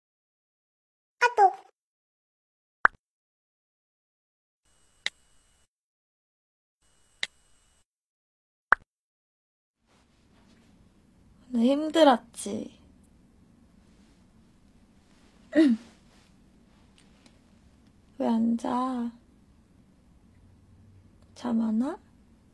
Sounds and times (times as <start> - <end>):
Speech: 1.2 - 1.7, 11.5 - 12.8, 18.2 - 19.2, 21.4 - 22.1.